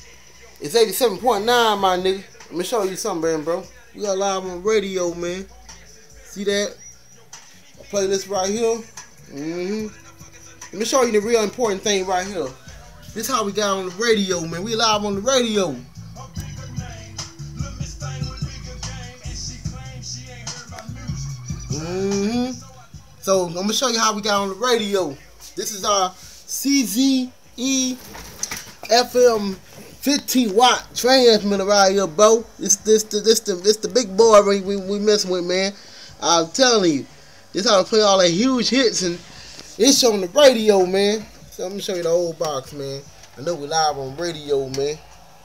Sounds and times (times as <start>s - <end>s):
Music: 0.0s - 45.4s
Speech: 0.5s - 5.6s, 6.2s - 6.8s, 7.8s - 10.0s, 10.7s - 15.8s, 21.7s - 28.1s, 28.8s - 39.2s, 39.8s - 45.0s.